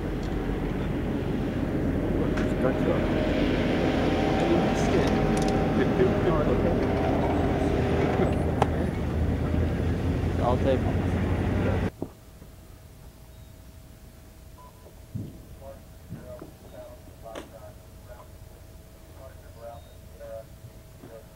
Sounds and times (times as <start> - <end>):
Speech: 2.2 - 3.1, 4.3 - 7.4, 8.1 - 11.9, 15.5 - 18.4, 19.1 - 21.3.